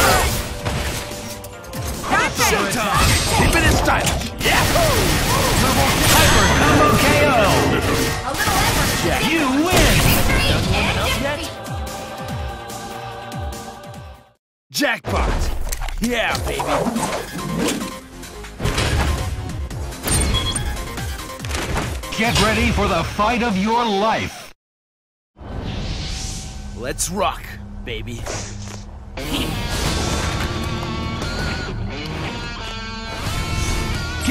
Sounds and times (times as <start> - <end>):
Music: 0.0 - 14.4, 16.1 - 23.7, 29.0 - 34.3
Speech: 14.7 - 17.0, 22.2 - 24.5, 26.8 - 28.4.